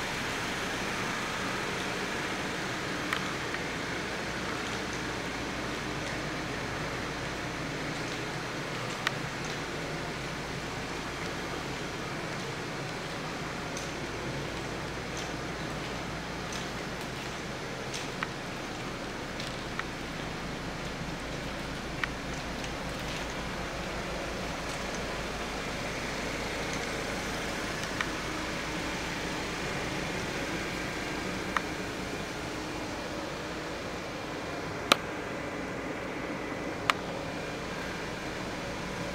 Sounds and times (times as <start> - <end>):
Inside, large room or hall: 0.0 - 34.8
Car: 0.0 - 39.1.